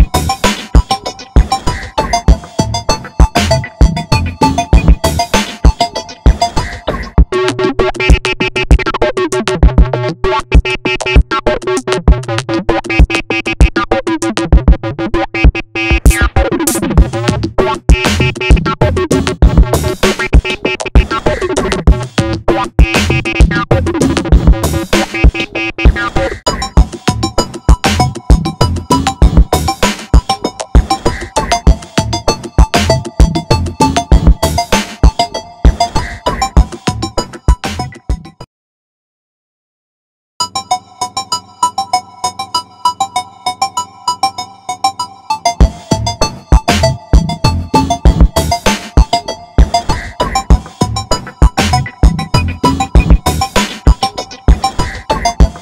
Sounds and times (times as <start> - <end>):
Music: 0.0 - 38.5, 40.4 - 55.6.